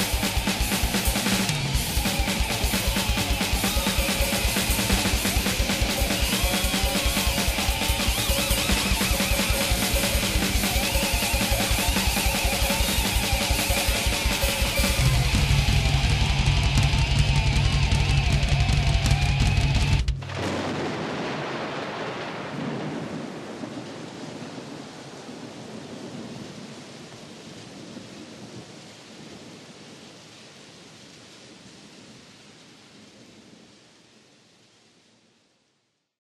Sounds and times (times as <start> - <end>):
Rain: 0.0 - 36.2.